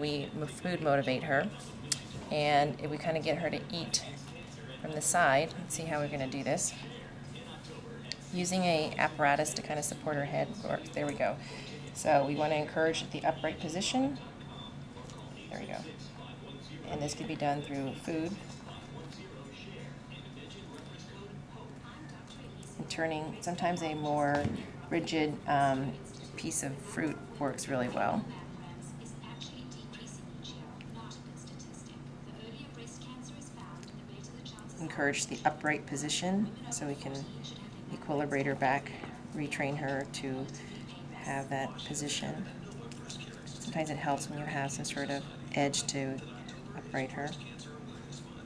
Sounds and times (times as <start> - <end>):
Speech: 0.0 - 48.4.